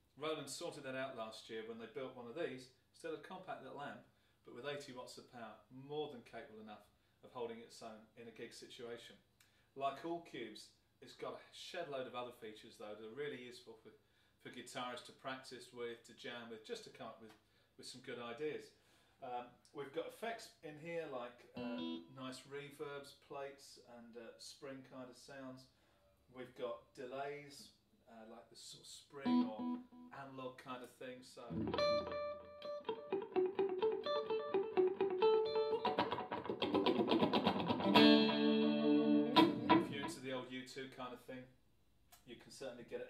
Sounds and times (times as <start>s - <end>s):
Speech: 0.1s - 31.6s, 39.8s - 41.5s, 42.2s - 43.0s.